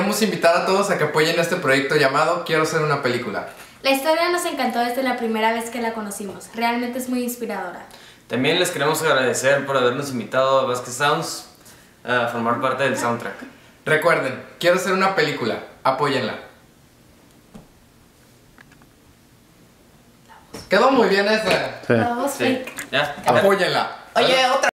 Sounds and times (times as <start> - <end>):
Speech: 20.7 - 24.7.